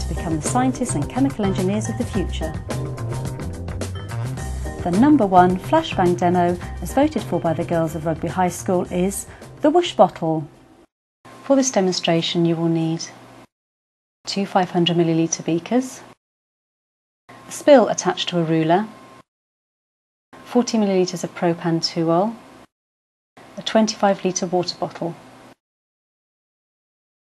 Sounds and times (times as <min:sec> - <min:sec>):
Speech: 0:00.0 - 0:02.6, 0:04.8 - 0:10.5, 0:11.5 - 0:13.2, 0:14.3 - 0:16.1, 0:17.5 - 0:18.9, 0:20.5 - 0:22.4, 0:23.6 - 0:25.2
Music: 0:00.0 - 0:10.2.